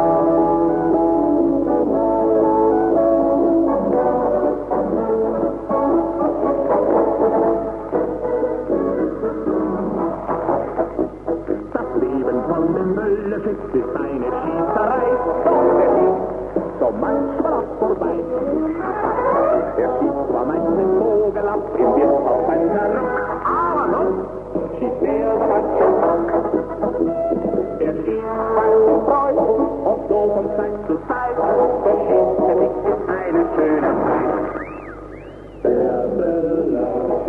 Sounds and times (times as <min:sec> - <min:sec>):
Brass instrument: 0:00.0 - 0:12.4, 0:13.8 - 0:36.3.